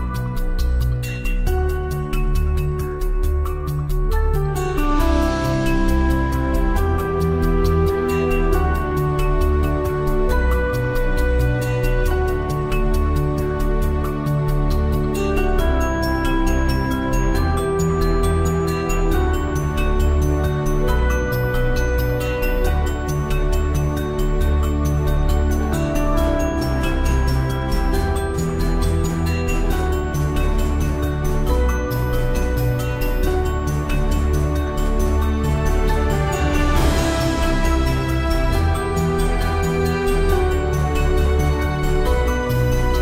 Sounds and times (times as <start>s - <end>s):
Background music: 0.0s - 43.0s.